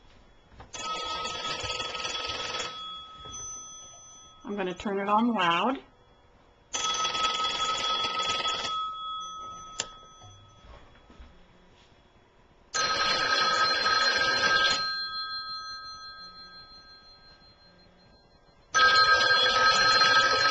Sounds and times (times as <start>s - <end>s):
Telephone bell ringing: 0.7s - 4.6s, 6.7s - 11.2s, 12.8s - 20.5s
Speech: 4.4s - 5.9s.